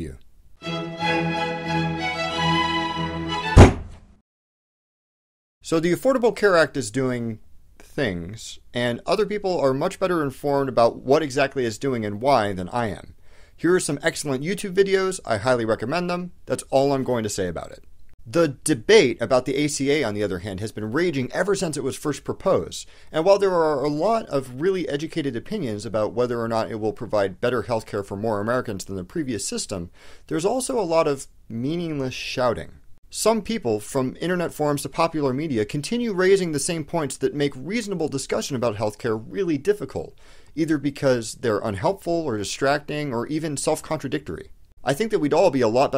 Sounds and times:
Speech: 0.0 - 0.2, 5.6 - 45.9.

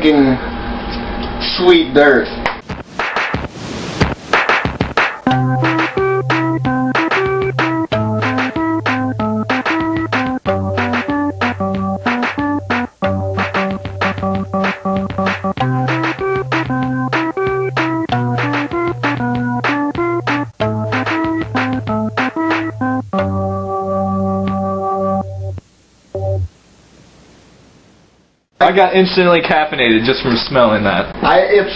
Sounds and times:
Electric piano: 5.3 - 25.6.

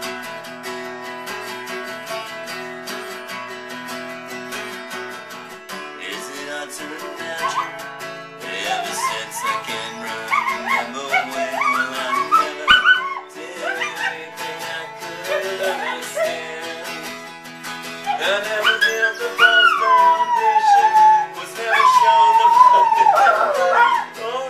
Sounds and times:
Music: 0.0 - 24.5
Howl: 7.4 - 7.8, 8.6 - 14.3, 15.2 - 16.4, 18.0 - 24.2.

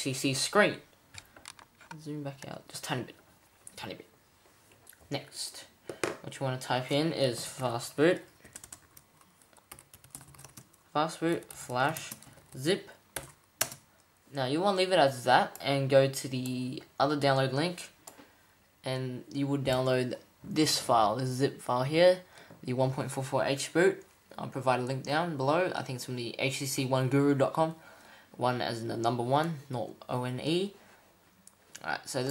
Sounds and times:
Speech: 0.0 - 0.8, 1.9 - 3.2, 3.8 - 4.1, 5.1 - 8.3, 11.0 - 13.0, 14.3 - 18.0, 18.8 - 27.8, 28.4 - 30.8, 31.8 - 32.3.

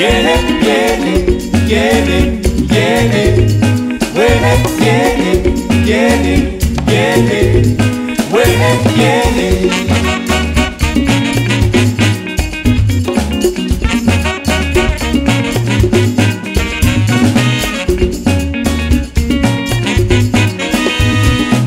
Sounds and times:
Happy music: 0.0 - 21.6.

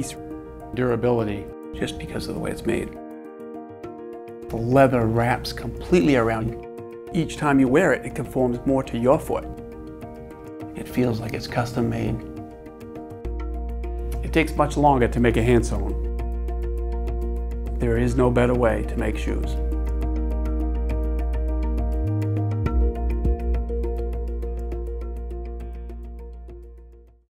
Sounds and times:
Music: 0.0 - 27.2
Speech: 0.8 - 3.0, 4.5 - 9.4, 10.8 - 12.2, 14.2 - 16.0, 17.8 - 19.6.

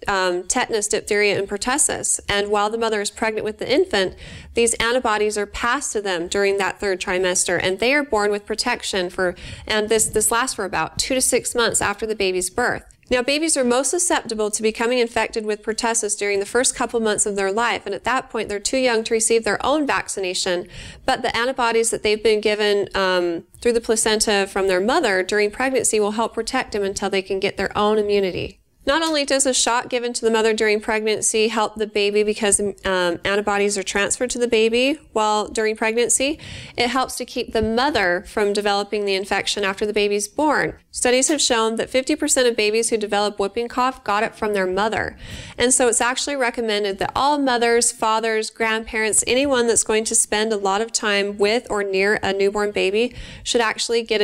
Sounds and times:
Speech: 0.0 - 54.2.

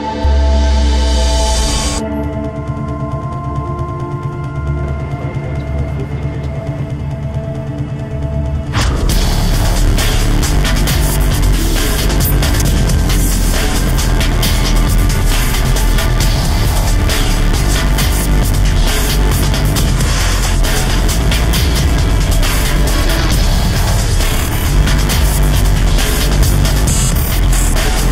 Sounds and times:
Music: 0.0 - 28.1.

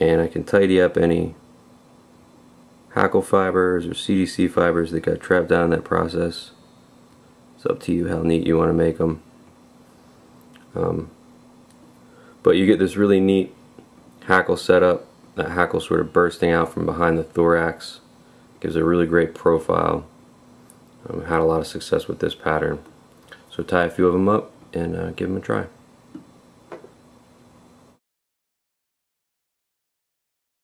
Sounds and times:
Speech: 0.0 - 1.4, 2.9 - 6.6, 7.6 - 9.3, 10.6 - 11.2, 12.4 - 13.6, 14.2 - 20.1, 21.0 - 22.9, 23.5 - 25.8
Inside, small room: 0.0 - 28.0.

